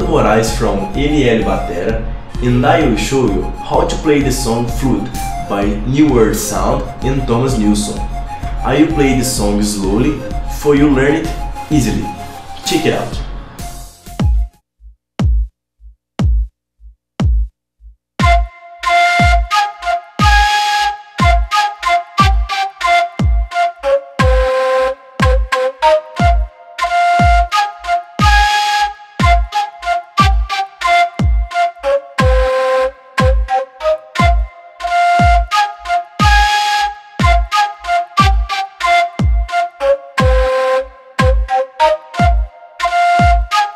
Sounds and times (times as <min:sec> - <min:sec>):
Music: 0:00.0 - 0:14.6, 0:15.2 - 0:15.6, 0:18.2 - 0:43.7.